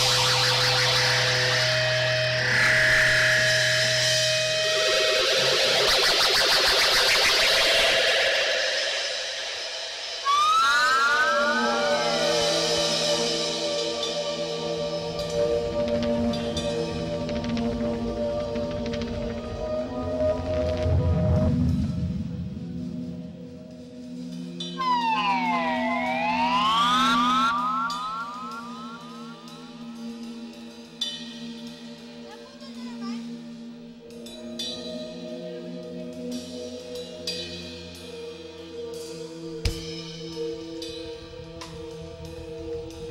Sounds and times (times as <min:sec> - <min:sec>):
Music: 0:00.0 - 0:43.1.